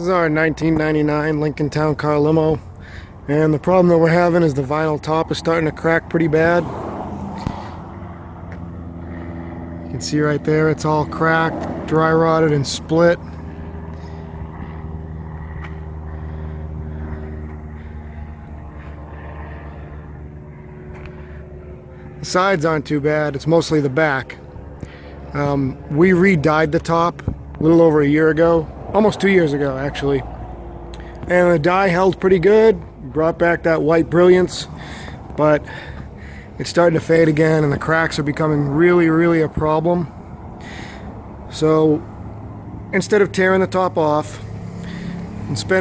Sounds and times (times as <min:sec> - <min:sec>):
Speech: 0:00.0 - 0:02.6, 0:03.3 - 0:06.7, 0:09.9 - 0:13.2, 0:22.2 - 0:24.4, 0:25.4 - 0:30.3, 0:31.2 - 0:34.8, 0:35.4 - 0:35.7, 0:36.6 - 0:40.1, 0:41.5 - 0:42.0, 0:42.9 - 0:44.4, 0:45.5 - 0:45.8.